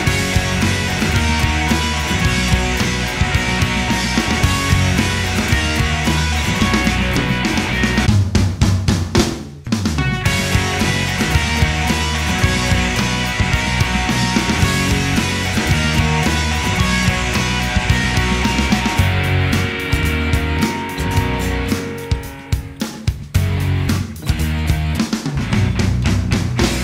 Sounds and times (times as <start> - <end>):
Music: 0.0 - 26.8.